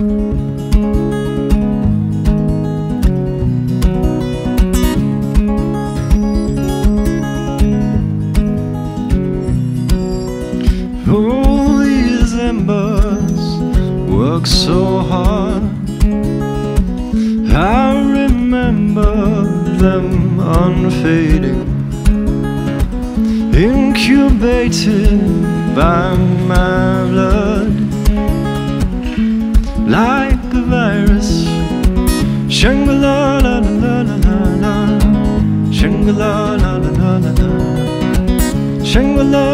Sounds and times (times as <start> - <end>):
Music: 0.0 - 39.5.